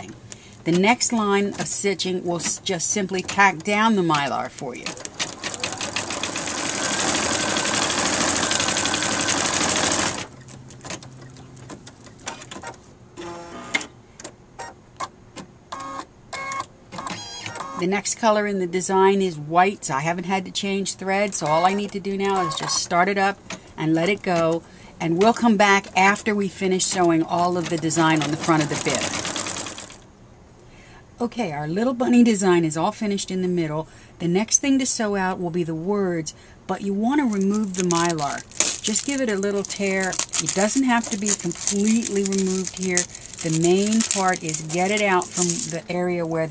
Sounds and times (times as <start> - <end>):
Speech: 0.0 - 5.0, 17.8 - 29.1, 31.2 - 46.5
Sewing machine: 4.9 - 10.3, 27.7 - 30.0.